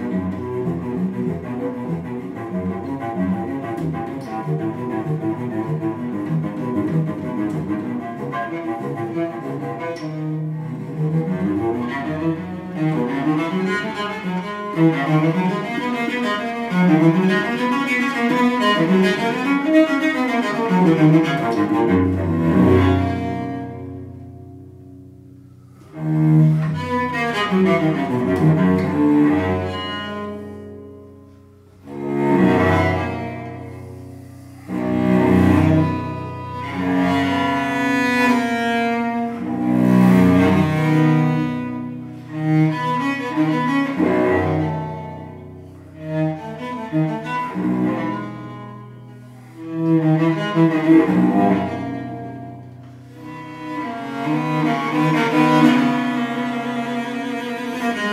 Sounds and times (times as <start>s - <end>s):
Cello: 0.0s - 58.1s
Classical music: 0.0s - 58.1s.